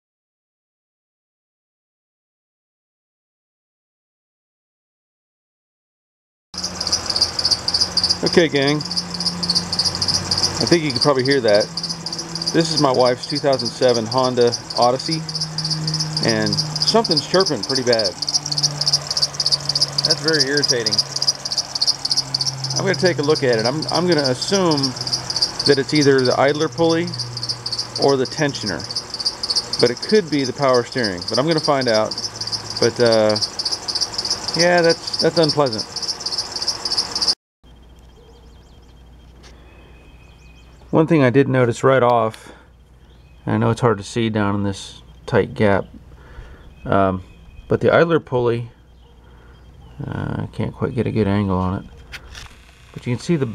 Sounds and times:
Cricket: 6.6s - 41.2s, 42.1s - 53.5s.

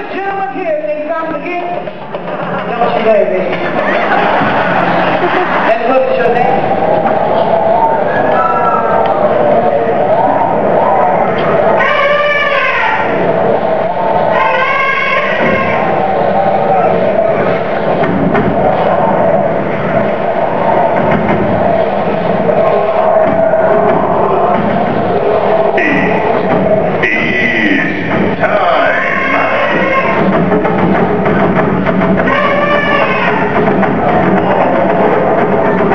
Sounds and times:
Music: 10.0s - 35.9s.

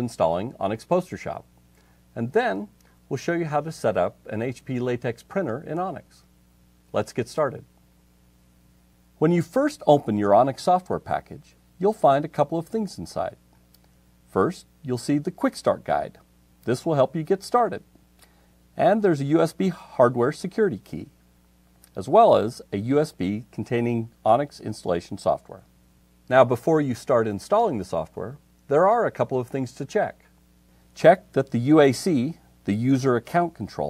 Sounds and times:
Speech: 0.0s - 1.5s, 2.1s - 6.3s, 6.9s - 7.7s, 9.2s - 13.4s, 14.3s - 17.9s, 18.8s - 21.2s, 21.9s - 25.7s, 26.3s - 30.3s, 31.0s - 33.8s.

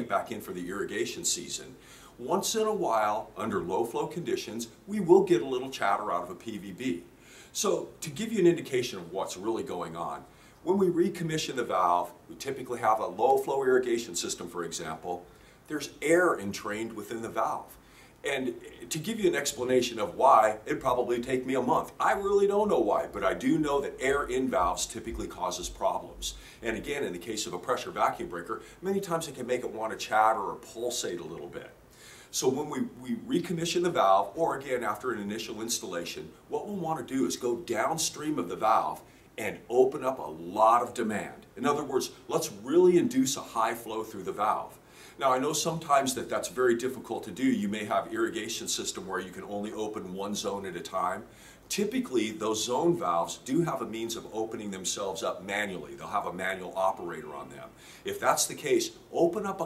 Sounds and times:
Speech: 0.0s - 59.6s.

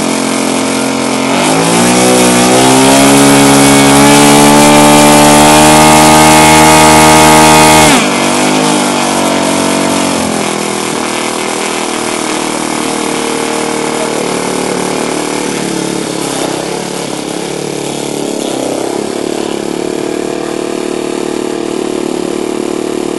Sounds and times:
Accelerating, revving, vroom: 0.0s - 23.1s.

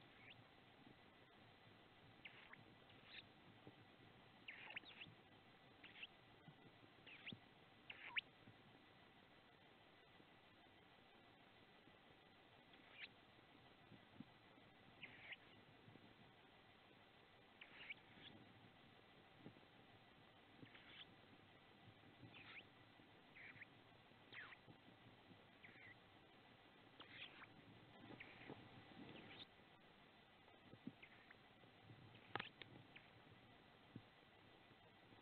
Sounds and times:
Owl: 0.0s - 0.5s, 2.1s - 3.8s, 4.4s - 5.2s, 5.8s - 8.3s, 12.7s - 13.2s, 14.9s - 15.7s, 17.6s - 18.5s, 20.6s - 21.2s, 22.2s - 24.9s, 25.5s - 26.0s, 27.0s - 29.5s, 30.7s - 31.4s, 32.2s - 33.2s.

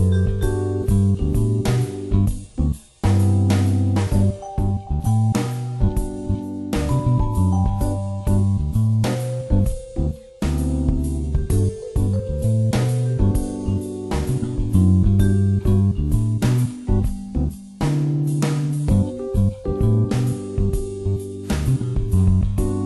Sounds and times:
Music: 0.0s - 22.8s.

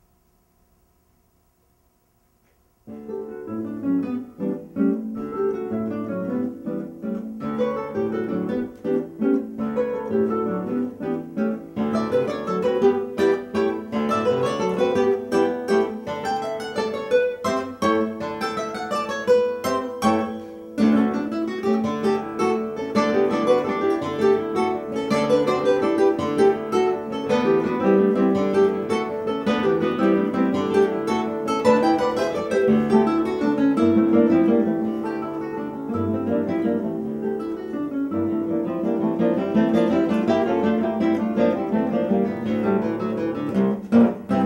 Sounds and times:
Acoustic guitar: 1.9s - 44.4s
Strum: 2.4s - 44.4s.

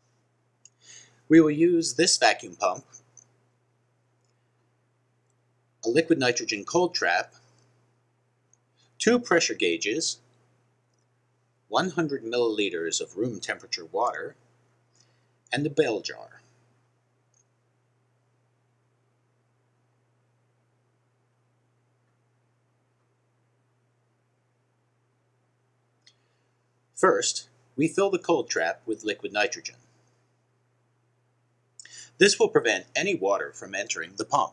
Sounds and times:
Speech: 1.3s - 3.0s, 5.9s - 7.3s, 9.0s - 10.2s, 11.8s - 14.4s, 15.6s - 16.4s, 27.0s - 29.8s, 32.1s - 34.5s.

